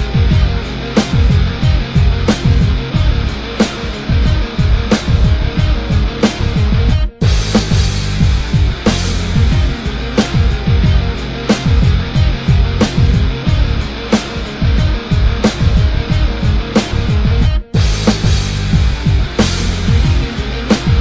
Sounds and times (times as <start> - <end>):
Soundtrack music: 0.0 - 21.0.